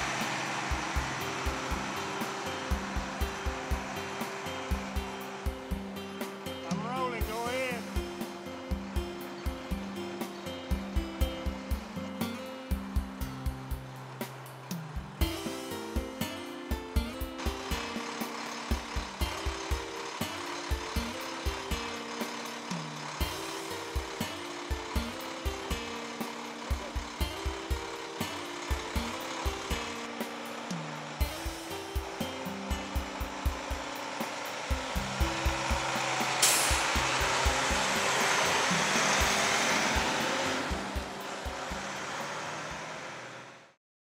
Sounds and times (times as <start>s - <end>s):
Music: 0.0s - 43.8s
Outside, urban or manmade: 0.0s - 43.8s
Truck: 0.0s - 43.8s.